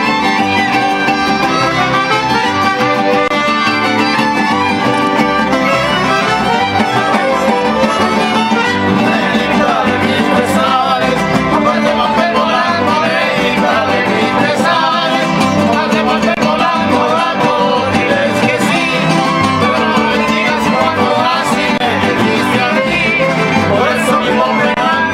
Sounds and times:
Music: 0.0 - 25.1.

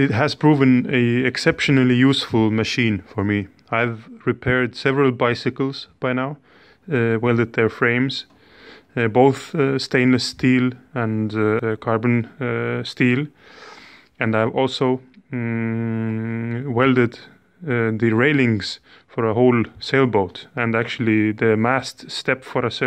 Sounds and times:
Speech: 0.0 - 8.3, 8.9 - 13.4, 14.2 - 22.8.

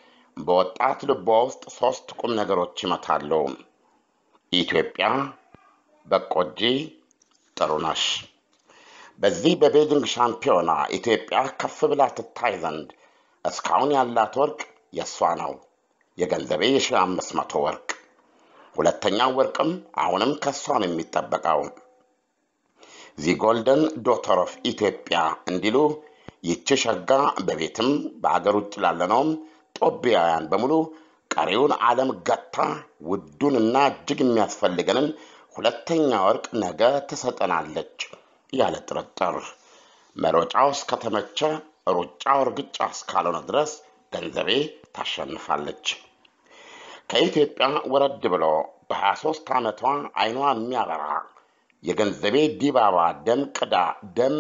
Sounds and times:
Speech: 0.4 - 3.6, 4.6 - 7.0, 7.6 - 8.3, 9.2 - 12.9, 13.5 - 15.6, 16.2 - 18.0, 18.8 - 21.8, 23.1 - 39.6, 40.2 - 46.1, 47.0 - 54.4.

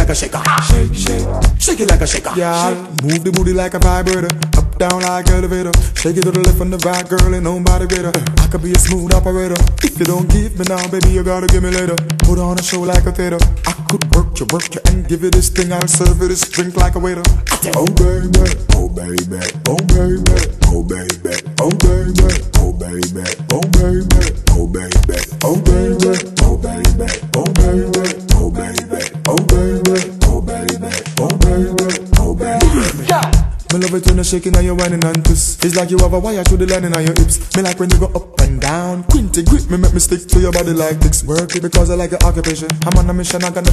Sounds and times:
Music: 0.0 - 43.7.

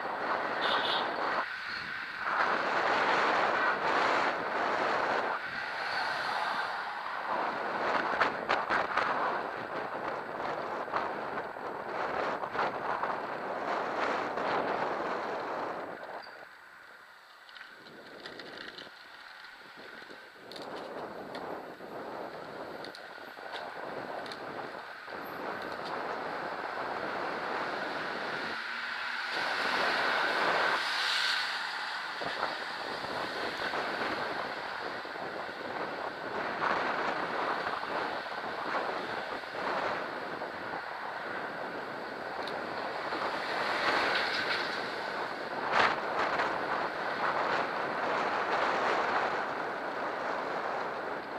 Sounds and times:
Vehicle: 0.0 - 51.3.

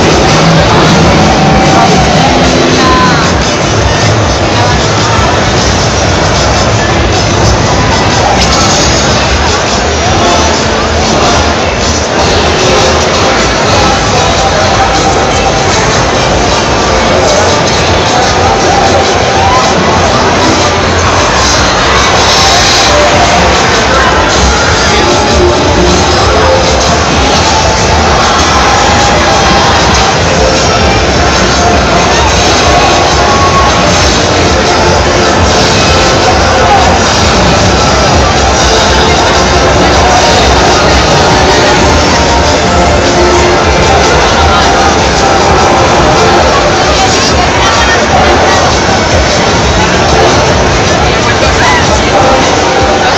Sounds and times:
Music: 0.0 - 53.1.

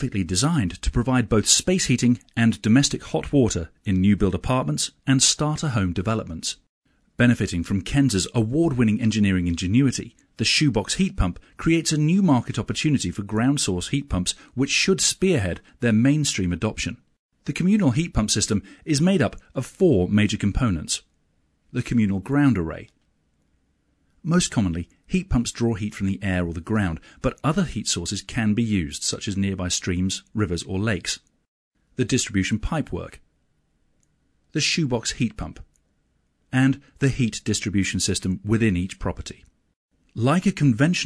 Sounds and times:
Speech: 0.0 - 21.1, 21.7 - 23.0, 24.2 - 31.3, 32.0 - 33.2, 34.5 - 35.7, 36.5 - 39.5, 40.2 - 41.0.

